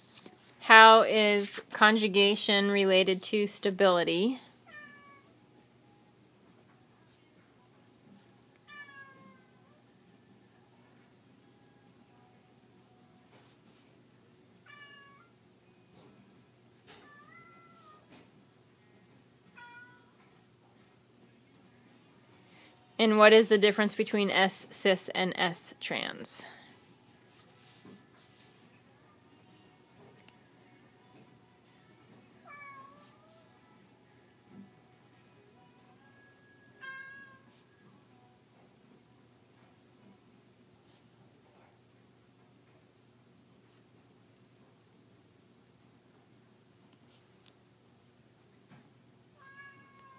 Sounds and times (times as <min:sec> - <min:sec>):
Meow: 0:04.6 - 0:05.4, 0:08.6 - 0:09.8, 0:14.6 - 0:15.4, 0:16.9 - 0:18.2, 0:19.5 - 0:20.3, 0:32.4 - 0:33.5, 0:36.1 - 0:37.7, 0:49.4 - 0:50.1.